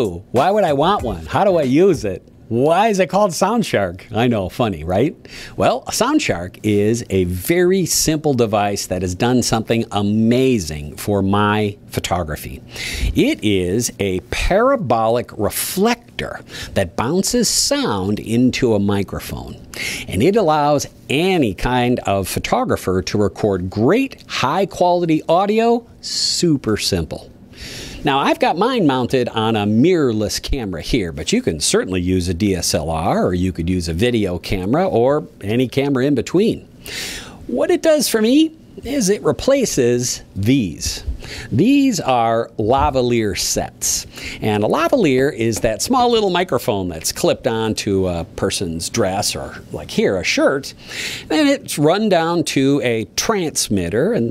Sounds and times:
Speech: 0.0s - 27.3s, 28.0s - 36.7s, 37.5s - 54.3s.

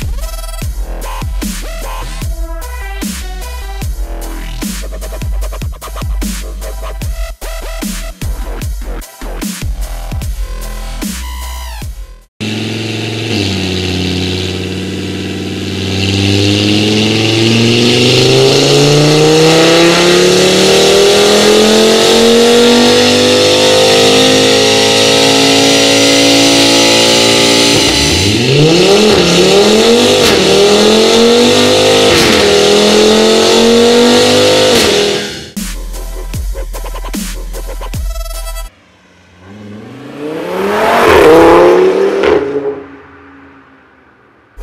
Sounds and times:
Music: 0.0s - 12.3s, 35.5s - 38.7s.

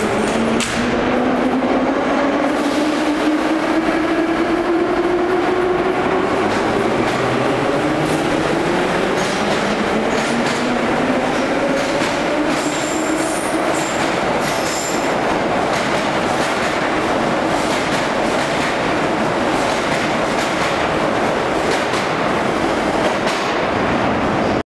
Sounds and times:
Train: 0.0s - 24.6s.

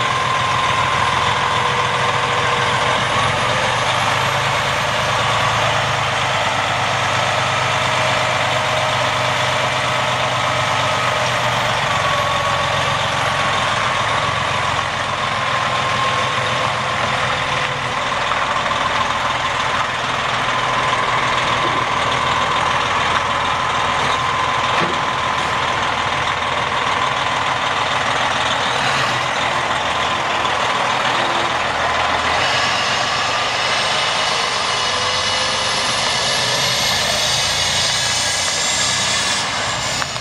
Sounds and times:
Truck: 0.0s - 40.2s.

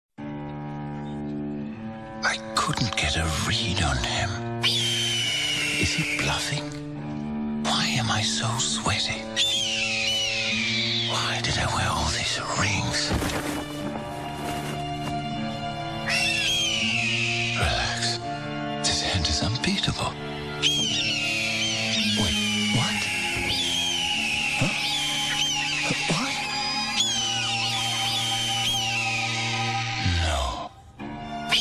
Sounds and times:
Music: 0.2s - 31.6s.

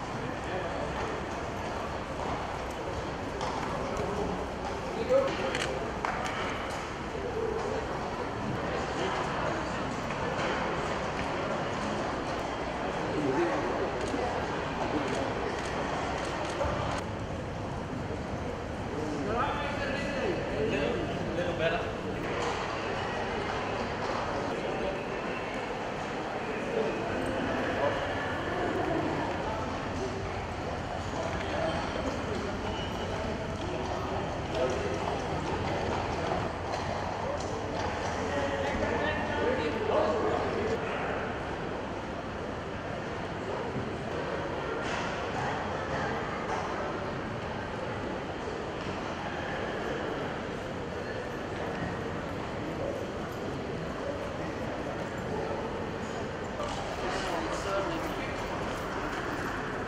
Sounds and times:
Speech: 0.0s - 17.1s, 17.8s - 59.8s.

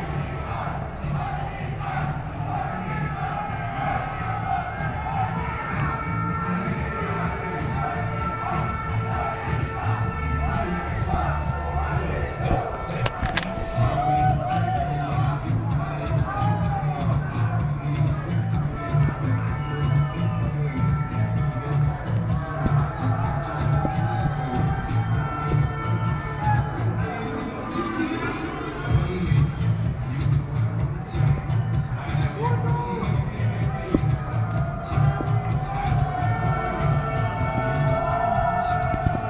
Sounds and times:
Music: 0.0s - 39.2s
Speech: 32.0s - 34.2s.

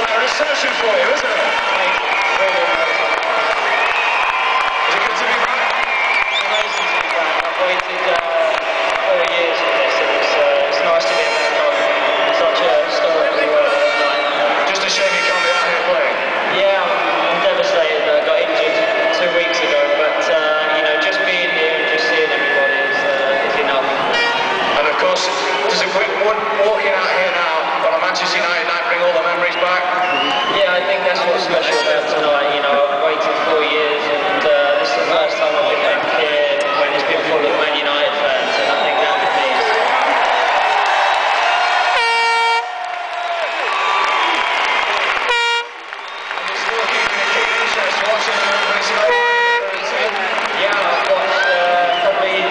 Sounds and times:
Male speech, man speaking: 0.0s - 3.6s, 4.8s - 5.7s, 6.3s - 24.0s, 24.8s - 40.1s, 46.4s - 52.5s.

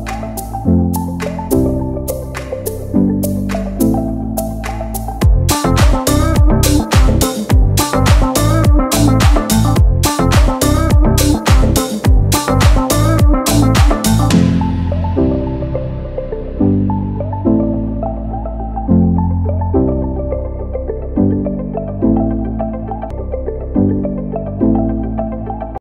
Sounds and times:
Music: 0.0s - 25.8s.

